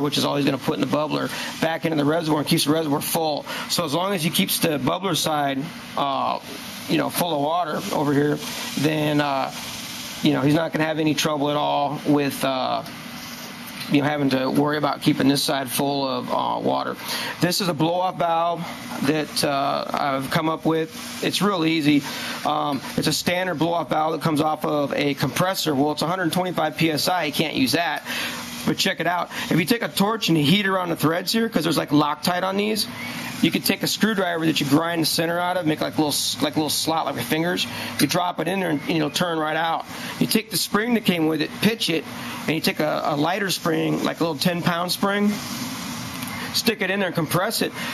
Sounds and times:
Speech: 0:00.0 - 0:09.6, 0:10.2 - 0:12.9, 0:13.8 - 0:45.4, 0:46.5 - 0:47.9
Outside, urban or manmade: 0:00.0 - 0:47.9.

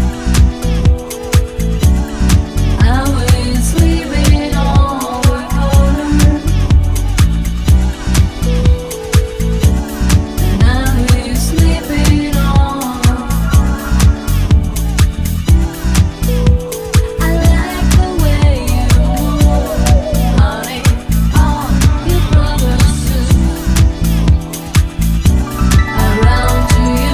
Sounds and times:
Disco: 0:00.0 - 0:27.1.

